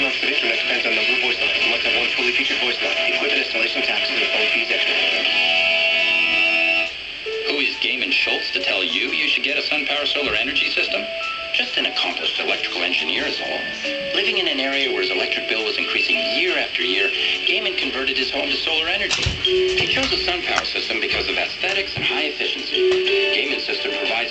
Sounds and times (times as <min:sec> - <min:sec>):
Radio: 0:00.0 - 0:05.4, 0:07.4 - 0:24.3
Speech: 0:00.0 - 0:05.4, 0:07.4 - 0:24.3
Music: 0:00.0 - 0:24.3.